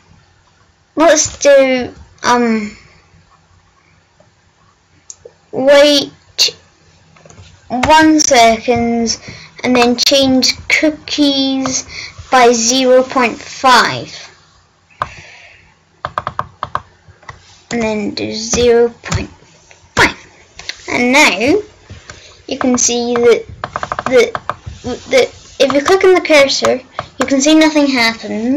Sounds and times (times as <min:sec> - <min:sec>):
Speech: 0:01.0 - 0:02.8, 0:05.5 - 0:06.6, 0:07.7 - 0:14.4, 0:17.7 - 0:19.3, 0:20.8 - 0:21.7, 0:22.5 - 0:23.5, 0:24.1 - 0:28.5.